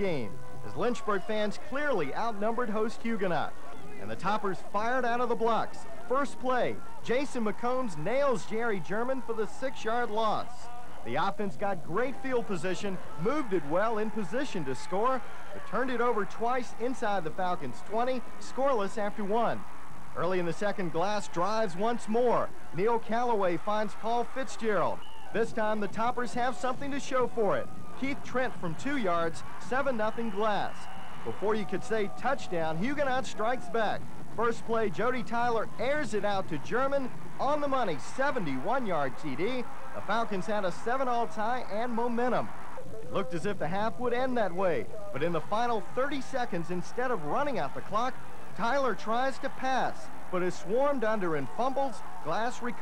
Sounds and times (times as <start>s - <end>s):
Speech: 0.0s - 19.6s, 20.2s - 52.8s.